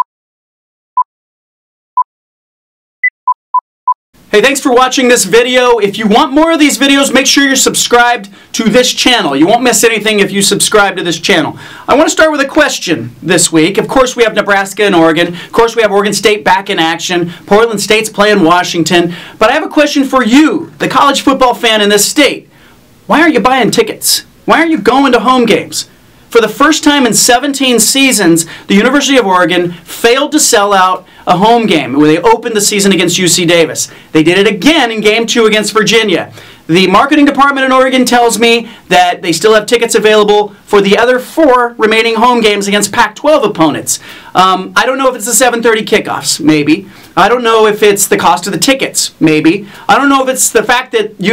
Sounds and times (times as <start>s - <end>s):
Speech: 4.3s - 22.5s, 23.1s - 51.3s.